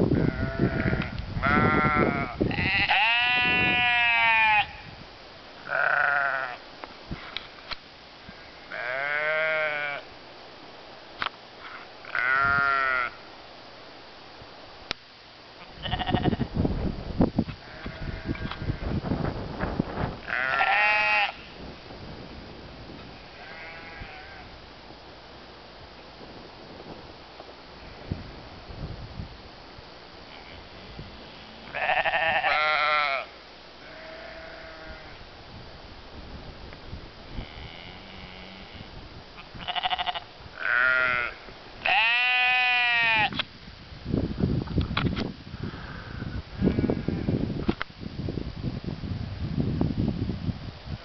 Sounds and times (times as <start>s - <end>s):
Livestock, farm animals, working animals: 0.2s - 5.0s, 5.6s - 6.7s, 7.3s - 10.1s, 11.6s - 13.3s, 15.5s - 16.5s, 17.5s - 19.0s, 20.2s - 21.6s, 23.0s - 25.0s, 30.0s - 35.3s, 37.3s - 43.5s, 45.7s - 47.4s.